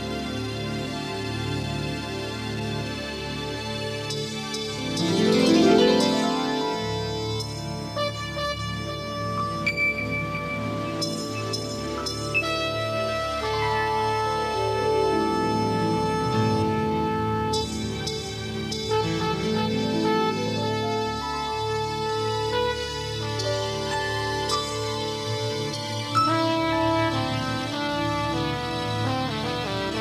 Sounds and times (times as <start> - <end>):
Soul music: 0.0 - 30.0.